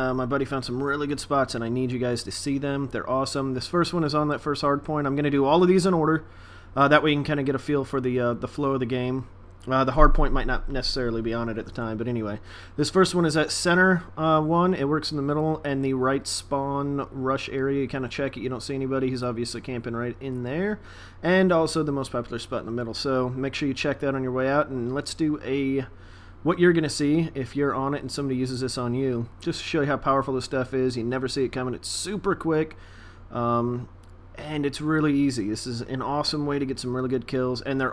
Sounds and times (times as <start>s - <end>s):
Speech: 0.0s - 37.9s.